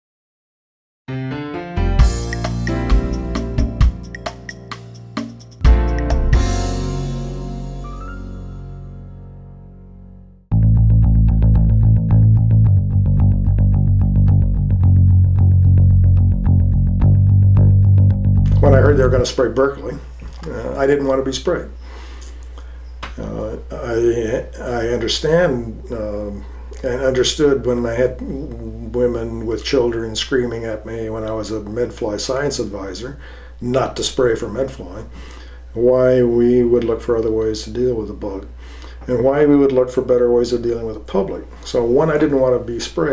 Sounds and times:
Speech: 0:18.5 - 0:21.8, 0:23.2 - 0:35.1, 0:35.8 - 0:43.1.

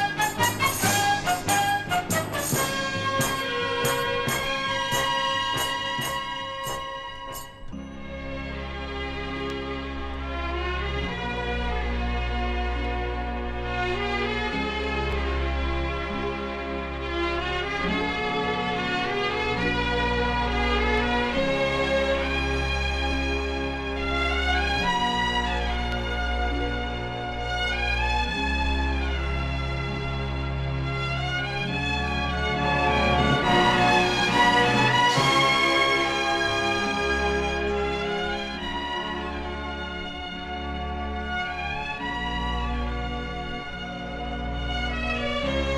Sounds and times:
Music: 0:00.0 - 0:45.7.

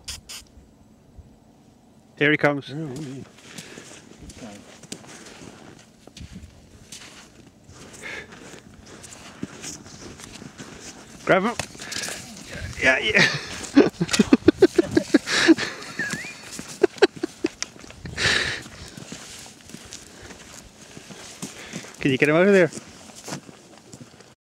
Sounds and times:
Speech: 0:02.2 - 0:03.3, 0:04.3 - 0:04.7, 0:11.2 - 0:11.6, 0:12.2 - 0:13.3, 0:22.0 - 0:22.8.

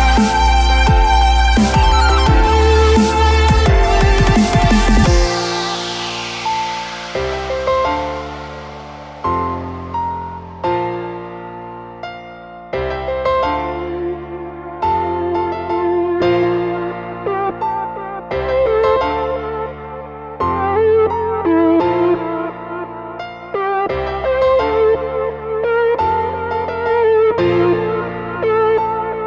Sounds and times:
Music: 0:00.0 - 0:29.2.

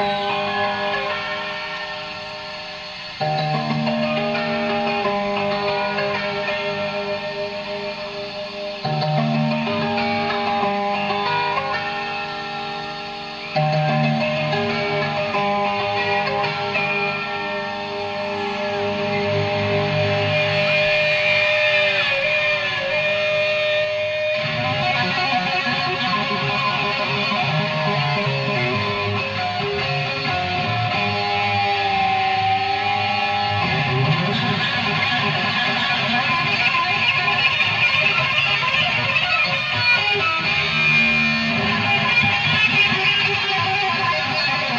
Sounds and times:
Music: 0:00.0 - 0:44.7.

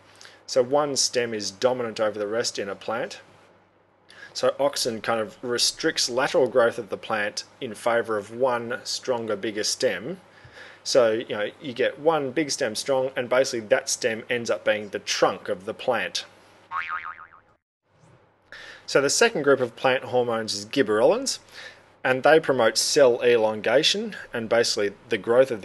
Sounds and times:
Speech: 0:00.5 - 0:03.3, 0:04.3 - 0:10.2, 0:10.8 - 0:16.3, 0:18.9 - 0:21.5, 0:22.1 - 0:25.6
Boing: 0:16.7 - 0:17.6.

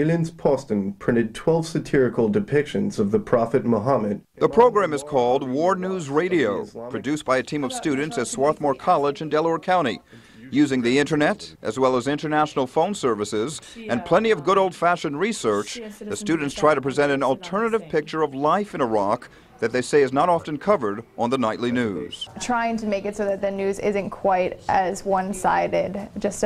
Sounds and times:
Speech: 0:00.0 - 0:26.4.

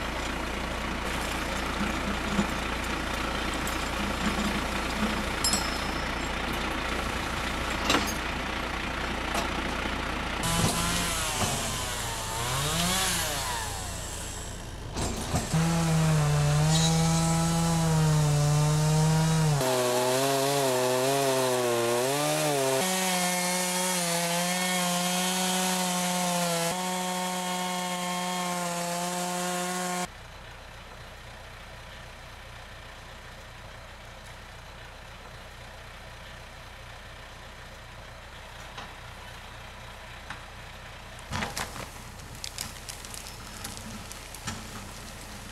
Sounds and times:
Vehicle: 0:00.0 - 0:45.5.

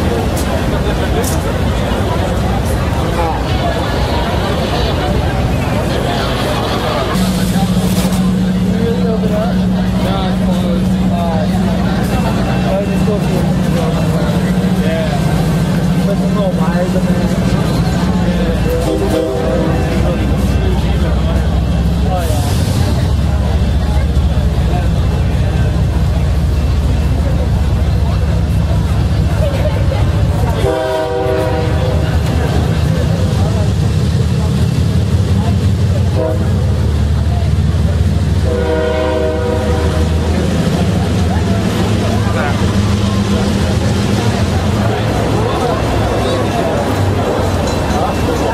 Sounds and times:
Speech: 0:00.0 - 0:48.5
Vehicle: 0:00.0 - 0:48.5.

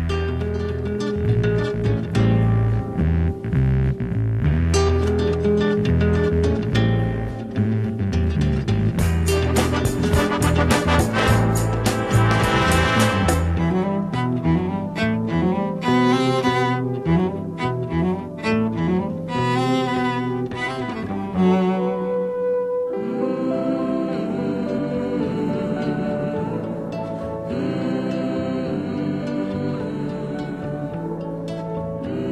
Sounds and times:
Cello: 0:00.0 - 0:32.3.

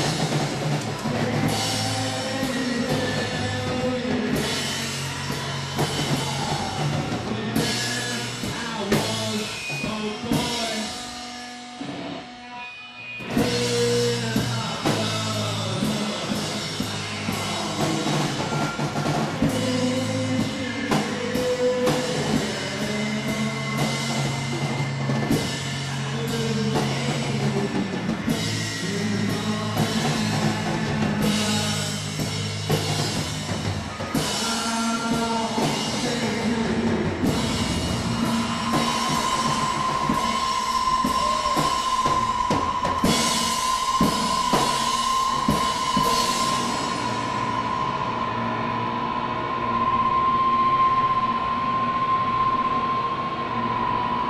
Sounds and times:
Singing: 0:00.0 - 0:11.0, 0:13.3 - 0:47.7.

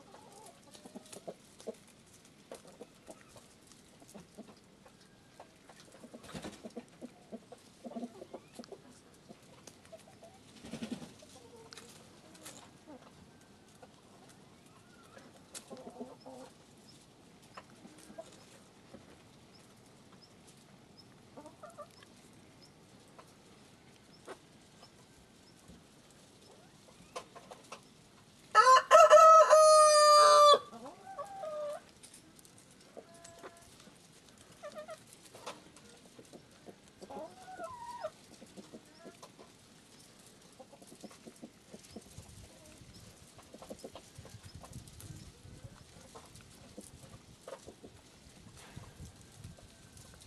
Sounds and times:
Pigeon, dove: 0:00.0 - 0:28.1, 0:30.8 - 0:50.2.

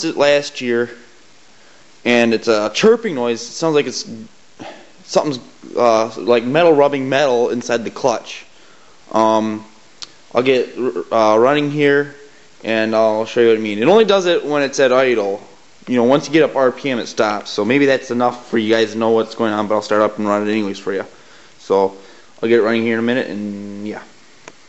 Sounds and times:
Speech: 0:00.0 - 0:01.1, 0:02.0 - 0:08.5, 0:09.1 - 0:24.1
White noise: 0:00.0 - 0:24.6.

